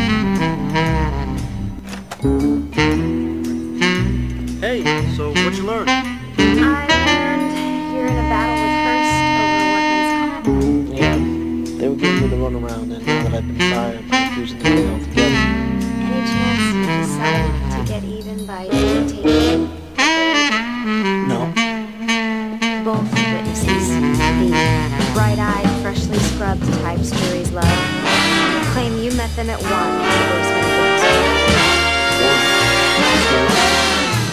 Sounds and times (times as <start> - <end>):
Music: 0.0 - 34.3
Speech: 4.6 - 20.6, 21.2 - 21.6, 22.8 - 28.0, 28.6 - 34.1.